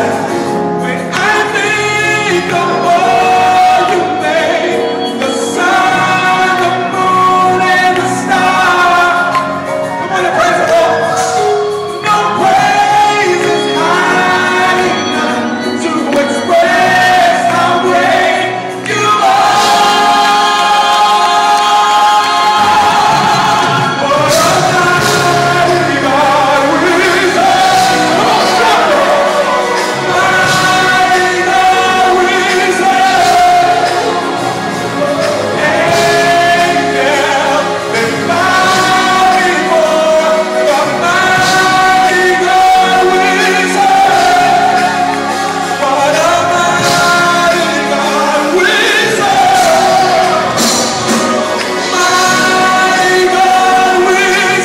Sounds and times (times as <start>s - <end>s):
Choir: 0.0s - 54.6s
Male singing: 0.0s - 54.6s.